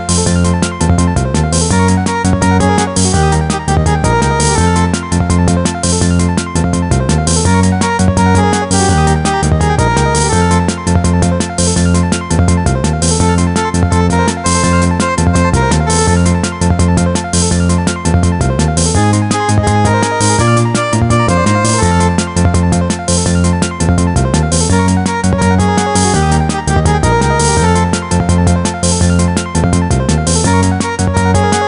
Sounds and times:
Music: 0.0 - 31.6.

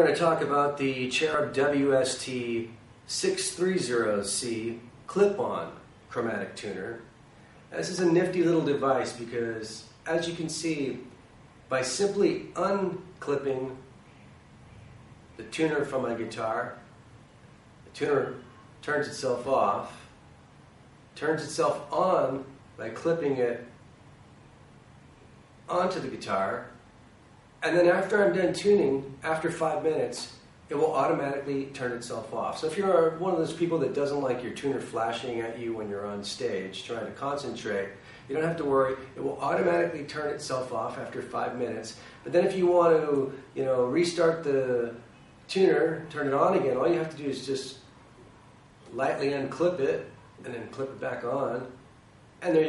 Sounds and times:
Speech: 0.0 - 7.1, 7.7 - 13.9, 15.4 - 16.9, 17.9 - 20.1, 21.2 - 23.8, 25.7 - 26.8, 27.6 - 47.9, 48.9 - 51.8, 52.4 - 52.6.

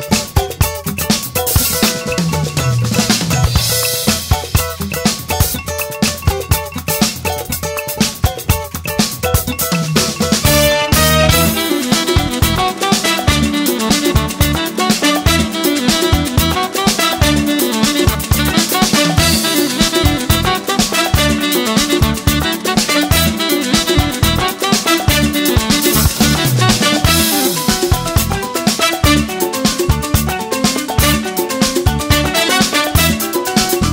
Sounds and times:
Saxophone: 10.4 - 33.9.

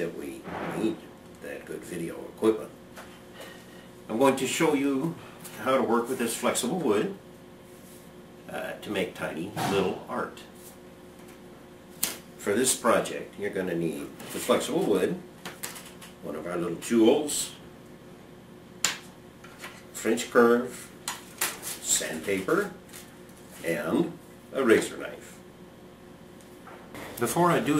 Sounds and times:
Speech: 0.0 - 2.8, 4.1 - 7.2, 8.5 - 10.6, 12.4 - 15.3, 16.2 - 17.6, 20.0 - 20.9, 21.8 - 22.8, 23.6 - 25.4, 27.2 - 27.7.

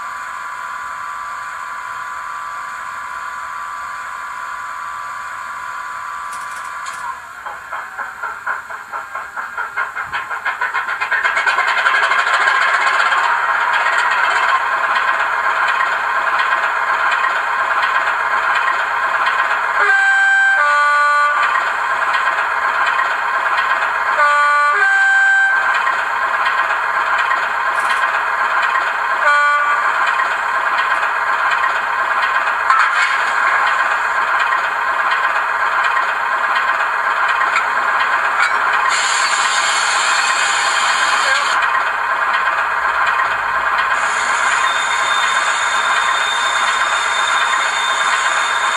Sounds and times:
Clatter: 6.3 - 19.6, 25.8 - 29.2, 29.9 - 48.7.

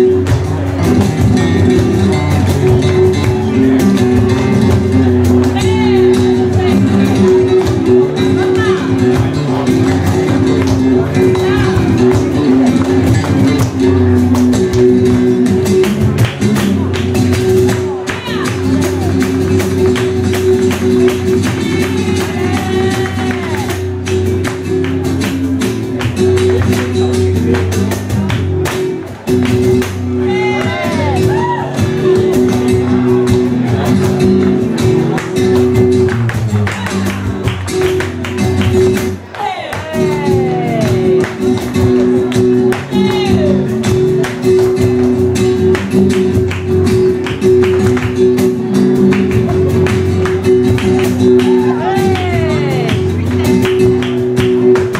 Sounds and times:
Flamenco: 0.0 - 54.9
Speech: 3.7 - 14.4, 16.4 - 19.6, 30.1 - 35.8, 39.2 - 43.7, 51.4 - 53.6.

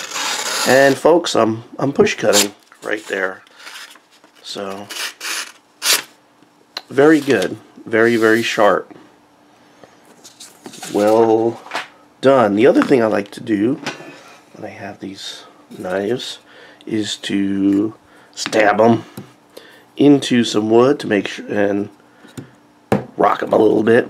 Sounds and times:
Inside, small room: 0.0 - 24.1
Speech: 0.7 - 3.4, 4.4 - 4.9, 6.8 - 9.0, 10.8 - 11.6, 12.2 - 13.9, 14.6 - 19.1, 20.0 - 22.0, 23.2 - 24.1.

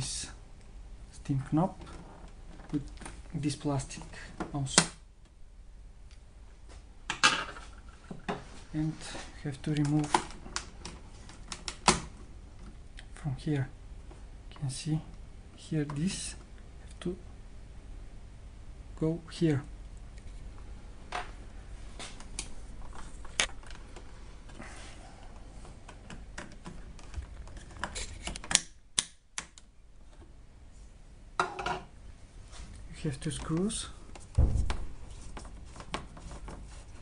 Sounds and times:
Speech: 0.0 - 0.4, 1.1 - 1.8, 2.7 - 5.0, 8.7 - 10.2, 13.1 - 13.8, 14.5 - 17.2, 19.0 - 19.7, 32.9 - 34.0.

